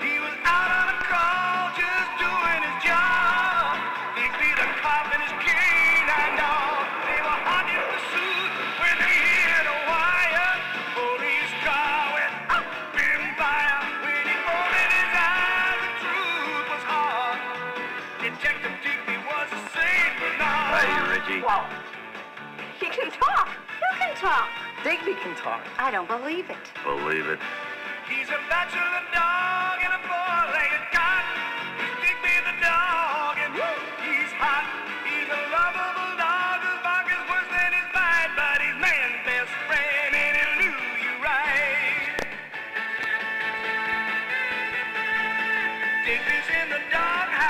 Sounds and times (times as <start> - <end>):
Music: 0.0 - 47.4
Speech: 20.7 - 21.7, 22.8 - 27.4.